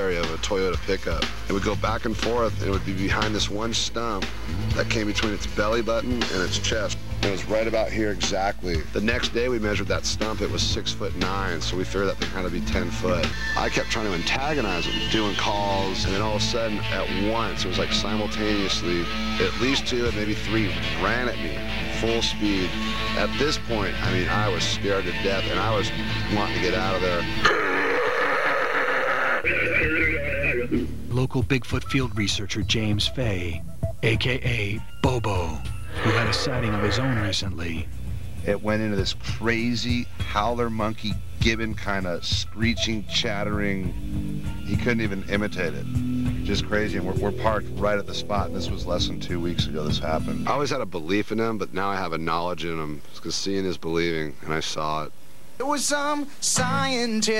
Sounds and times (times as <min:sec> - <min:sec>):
Speech: 0:00.0 - 0:27.3, 0:31.1 - 0:44.0, 0:44.7 - 0:57.3
Music: 0:00.0 - 0:52.8, 0:55.6 - 0:57.3.